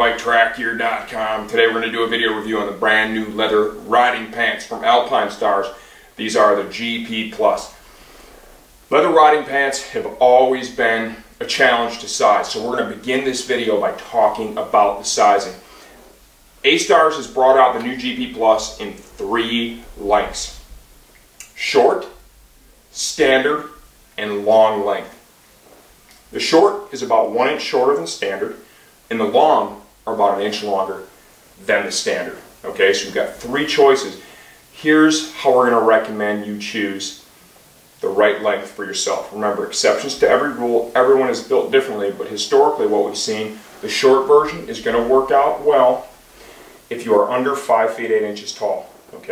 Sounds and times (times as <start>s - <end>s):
Speech: 0.0s - 7.8s, 8.9s - 15.6s, 16.6s - 20.7s, 21.4s - 22.2s, 22.9s - 25.2s, 26.3s - 37.3s, 38.0s - 46.2s, 46.9s - 49.3s.